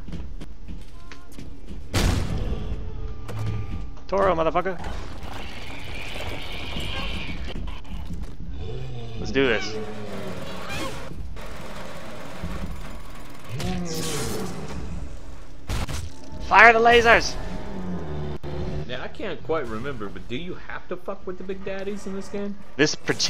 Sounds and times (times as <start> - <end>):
Speech: 18.9 - 23.2.